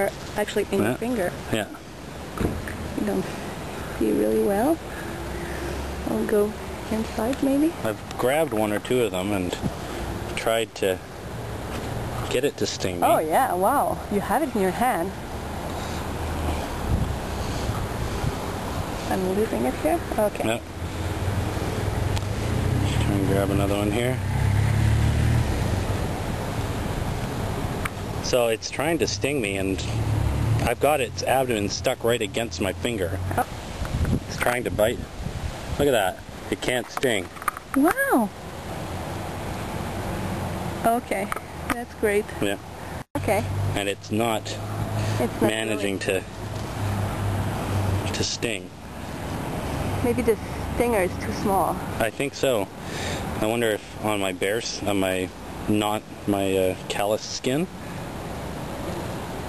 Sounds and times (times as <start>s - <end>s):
Speech: 0.0s - 1.8s, 6.1s - 9.6s, 10.4s - 11.0s, 12.3s - 15.0s, 22.8s - 24.2s, 28.3s - 30.0s, 30.6s - 33.1s, 34.3s - 35.0s, 35.8s - 38.3s, 43.2s - 44.6s, 45.2s - 46.3s, 48.1s - 48.7s, 50.1s - 52.7s, 53.4s - 57.7s
Outside, urban or manmade: 0.0s - 59.4s.